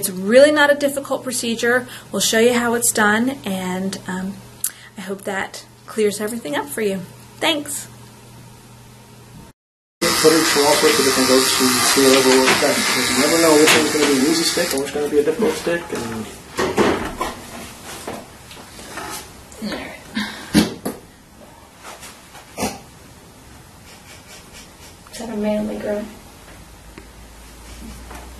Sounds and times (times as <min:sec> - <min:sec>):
Speech: 0:05.0 - 0:07.9, 0:10.0 - 0:16.3, 0:25.1 - 0:26.2
Electric shaver, electric razor: 0:10.0 - 0:15.1.